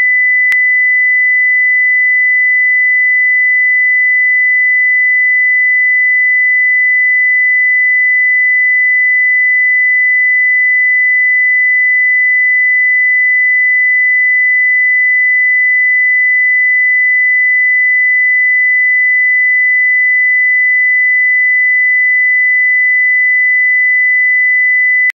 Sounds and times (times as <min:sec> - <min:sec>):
Sine wave: 0:00.0 - 0:25.1.